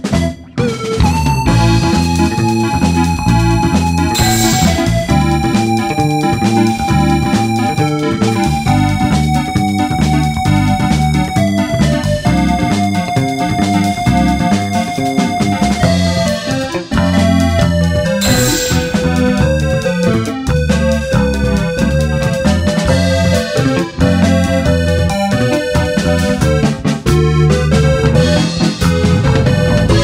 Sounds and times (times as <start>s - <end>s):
Video game music: 3.5s - 7.3s, 18.2s - 20.1s.